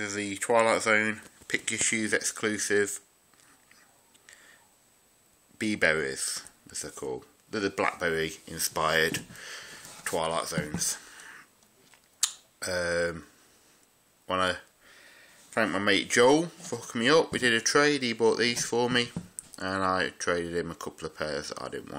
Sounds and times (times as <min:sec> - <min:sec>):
Speech: 0:00.0 - 0:03.1, 0:05.6 - 0:09.3, 0:10.0 - 0:11.0, 0:12.6 - 0:13.3, 0:14.3 - 0:14.7, 0:15.6 - 0:21.9.